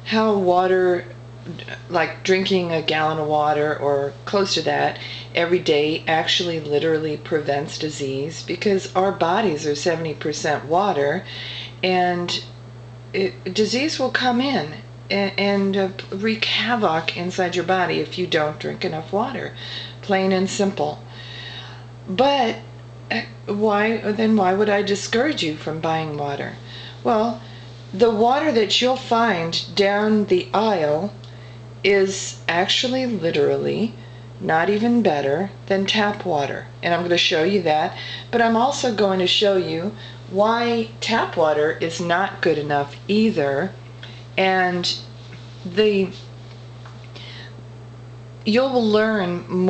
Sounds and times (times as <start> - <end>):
Speech: 0.0 - 12.5, 13.2 - 21.0, 22.1 - 27.4, 28.0 - 31.2, 31.8 - 43.8, 44.4 - 46.2, 48.4 - 49.6.